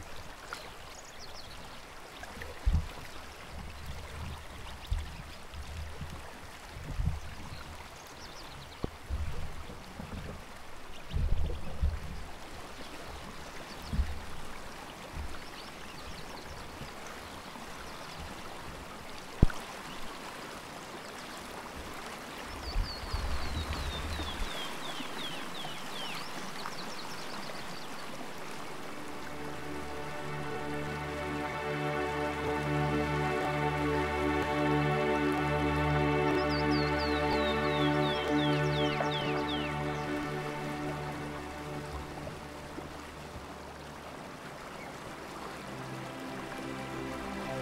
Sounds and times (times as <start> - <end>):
Rowboat, canoe, kayak: 0.0 - 47.6.